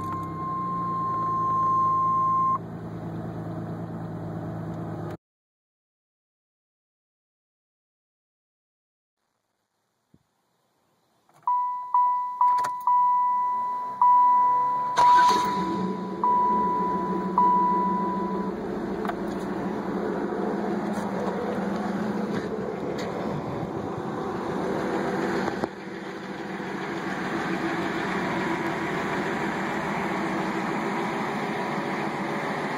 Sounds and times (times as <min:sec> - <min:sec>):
Vehicle: 0:00.0 - 0:05.2, 0:11.0 - 0:32.7.